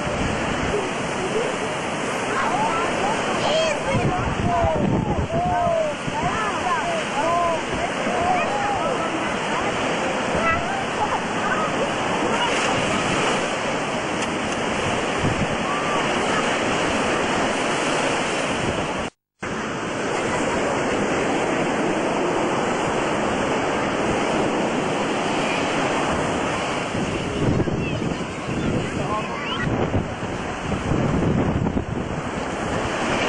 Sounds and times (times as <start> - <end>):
Waves, surf: 0.0 - 33.2
Wind noise (microphone): 0.0 - 33.2.